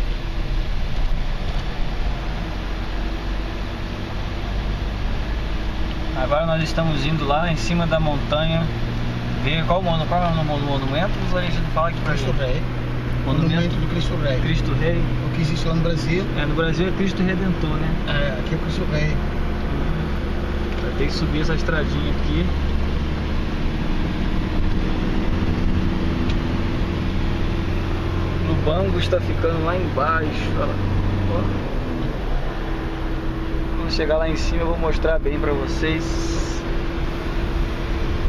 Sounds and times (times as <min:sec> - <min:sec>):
Speech: 0:09.4 - 0:12.7, 0:13.3 - 0:19.2, 0:20.8 - 0:22.6, 0:28.4 - 0:31.7, 0:33.8 - 0:36.6.